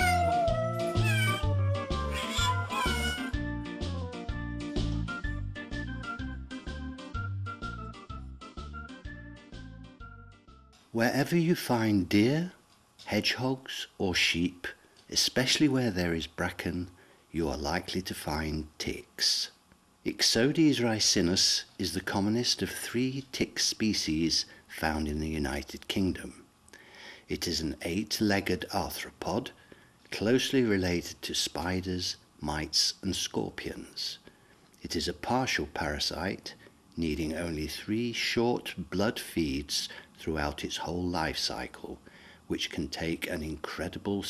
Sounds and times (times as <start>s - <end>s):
Speech: 11.0s - 26.5s, 27.3s - 34.2s, 34.8s - 44.3s.